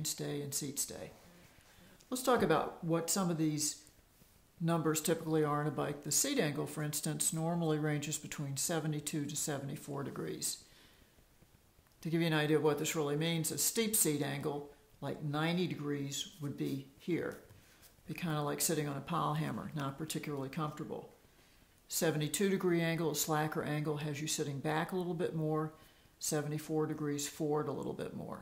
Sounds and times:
Speech: 0.0s - 1.2s, 2.1s - 3.9s, 4.6s - 10.6s, 12.0s - 17.5s, 18.1s - 21.2s, 21.9s - 28.4s.

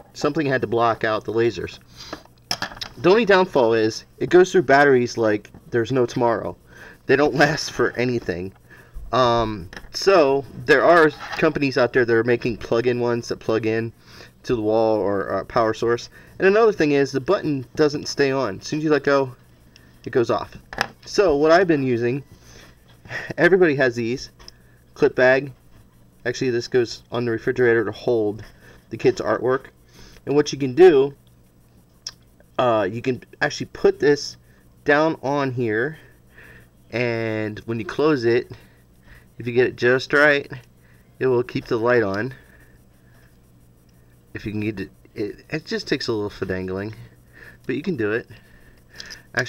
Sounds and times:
Inside, small room: 0.0s - 49.4s
Speech: 0.2s - 1.8s, 3.0s - 19.4s, 20.1s - 22.2s, 23.4s - 24.3s, 25.0s - 25.6s, 26.2s - 29.7s, 30.3s - 31.2s, 32.6s - 36.1s, 36.9s - 38.6s, 39.4s - 40.6s, 41.2s - 42.4s, 44.4s - 47.1s, 47.7s - 48.4s.

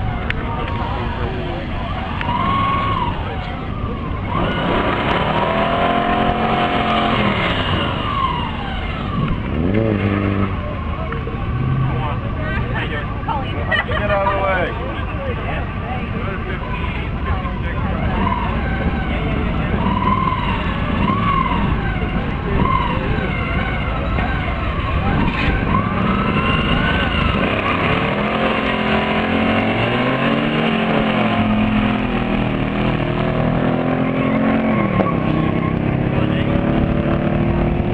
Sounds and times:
Hubbub, speech noise, speech babble: 0.0s - 37.9s
Outside, rural or natural: 0.0s - 37.9s
Race car, auto racing: 0.0s - 37.9s
Speech: 10.6s - 19.9s, 35.4s - 36.8s.

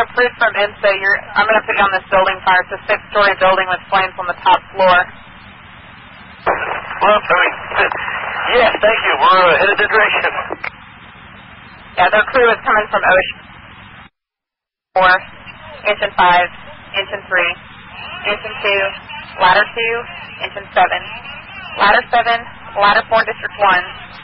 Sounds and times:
Speech: 0.0s - 5.1s, 7.0s - 10.7s, 12.0s - 13.4s, 15.0s - 24.2s
Crackle: 3.8s - 14.1s.

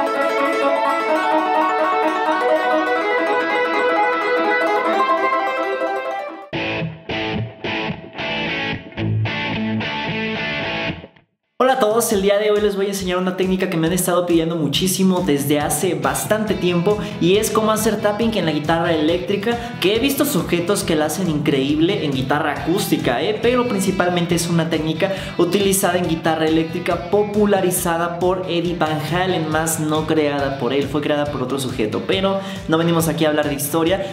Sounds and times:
Music: 0.0s - 34.1s
Speech: 11.6s - 34.1s.

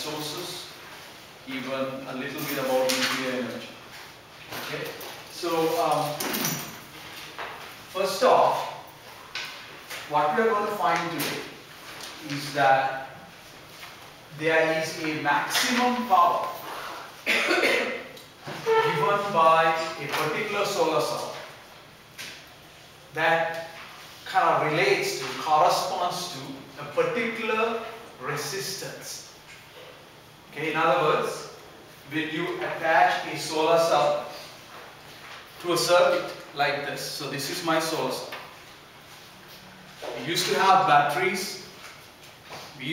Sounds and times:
Speech: 0.0s - 0.8s, 1.5s - 3.8s, 4.6s - 6.4s, 8.0s - 8.9s, 10.1s - 11.6s, 12.2s - 13.2s, 14.3s - 16.6s, 17.3s - 21.5s, 23.1s - 29.3s, 30.5s - 34.6s, 35.6s - 38.4s, 40.0s - 41.8s.

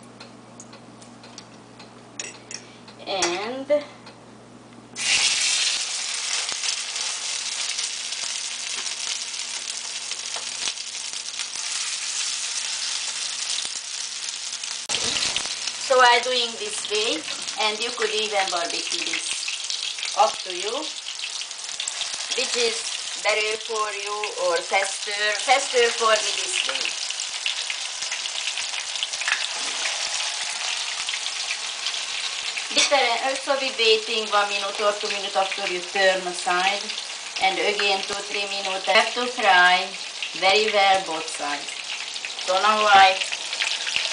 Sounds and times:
Frying (food): 5.0s - 44.1s.

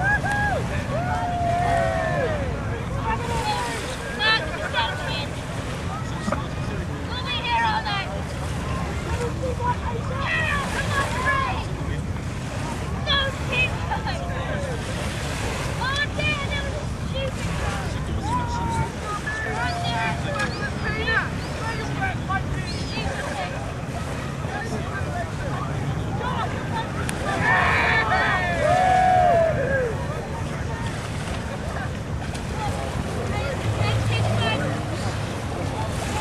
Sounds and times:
Waves, surf: 0.0s - 36.2s.

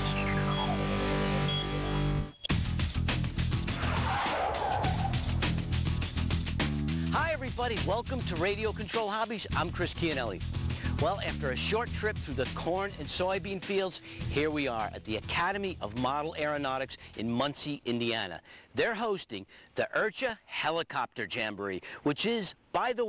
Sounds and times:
Music: 0.0s - 17.4s
Speech: 7.1s - 10.4s, 11.0s - 23.0s.

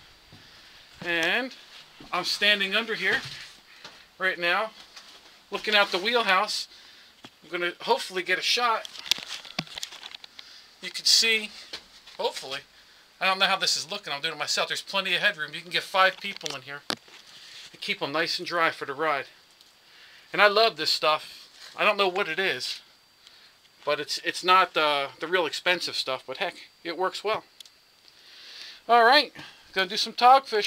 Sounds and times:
Speech: 1.0s - 3.4s, 4.2s - 4.8s, 5.5s - 6.7s, 7.4s - 8.9s, 10.8s - 11.6s, 12.2s - 16.9s, 17.8s - 19.4s, 20.3s - 22.9s, 23.8s - 27.5s, 28.9s - 30.6s.

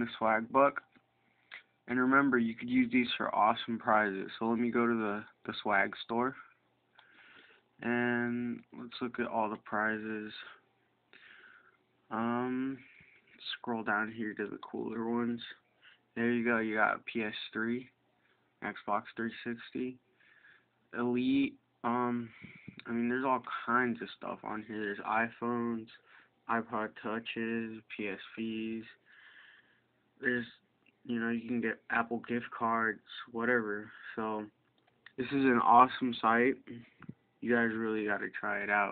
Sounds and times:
Speech: 0.0s - 0.9s, 1.9s - 6.5s, 7.8s - 10.6s, 12.1s - 15.6s, 16.2s - 18.0s, 18.6s - 20.0s, 20.9s - 29.0s, 30.2s - 38.9s.

